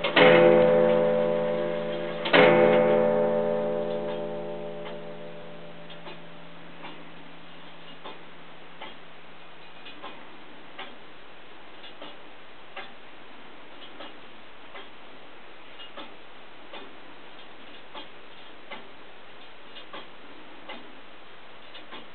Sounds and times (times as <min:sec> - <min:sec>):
Tick-tock: 0:05.9 - 0:07.0, 0:08.8 - 0:09.0, 0:10.8 - 0:11.0, 0:12.8 - 0:13.0, 0:15.8 - 0:18.1, 0:18.7 - 0:20.9.